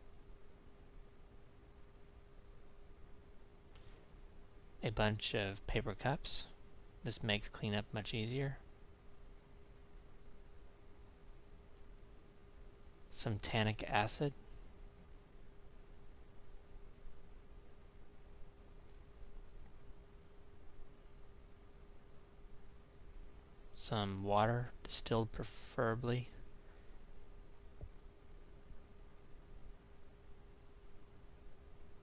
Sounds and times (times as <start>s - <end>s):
Speech: 4.8s - 8.6s, 13.1s - 14.4s, 23.8s - 26.4s.